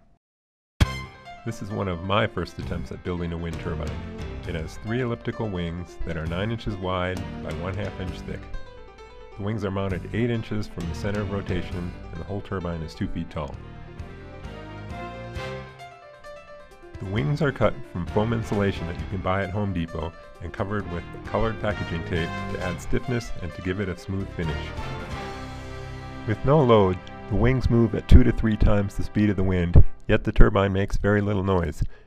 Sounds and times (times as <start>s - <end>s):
Music: 0.8s - 32.0s
Speech: 1.5s - 8.5s, 9.4s - 13.6s, 17.0s - 24.9s, 26.3s - 32.0s.